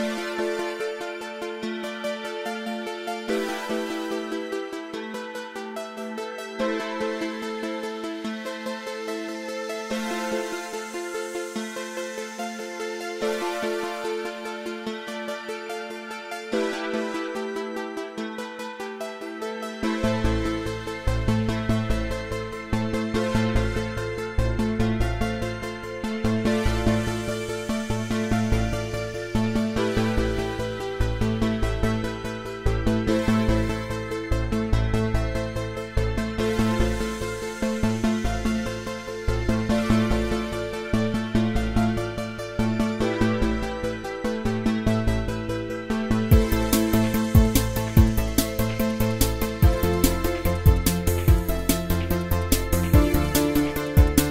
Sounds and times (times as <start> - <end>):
Music: 0.0 - 54.3.